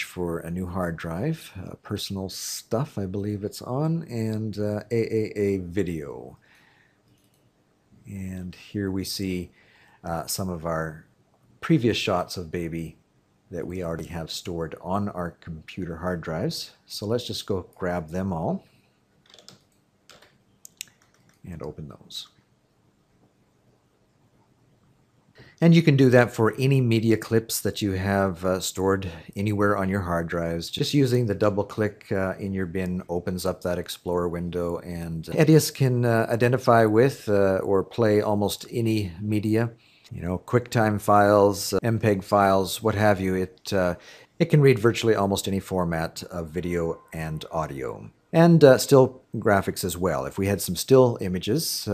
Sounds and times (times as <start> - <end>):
Typing: 19.2 - 21.8.